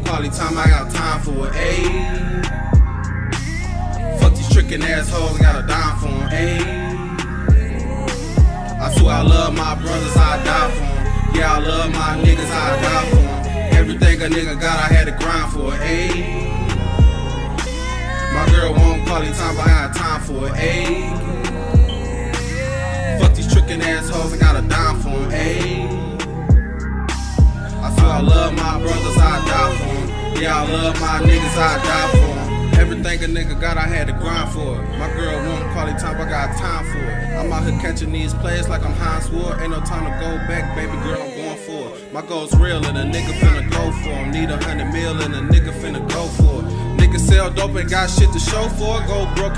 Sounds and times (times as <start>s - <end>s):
Music: 0.0s - 49.5s.